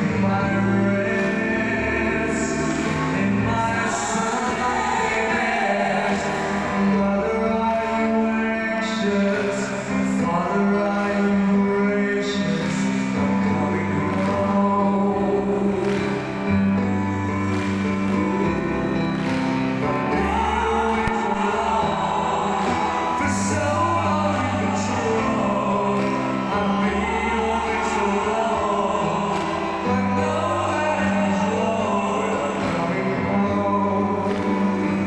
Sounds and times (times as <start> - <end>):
Music: 0.0 - 35.0.